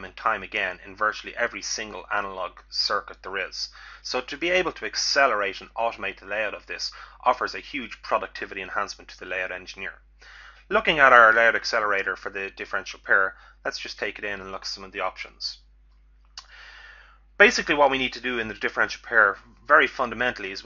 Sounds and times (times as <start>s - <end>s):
Speech: 0.0s - 10.0s, 10.7s - 15.6s, 17.4s - 20.6s.